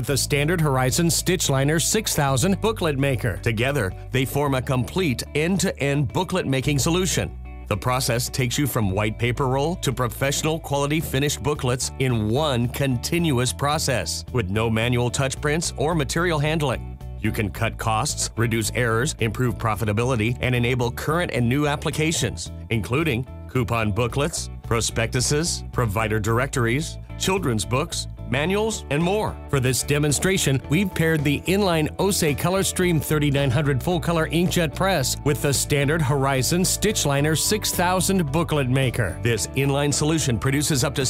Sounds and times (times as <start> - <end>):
Music: 0.0 - 41.1
Speech: 0.0 - 41.1.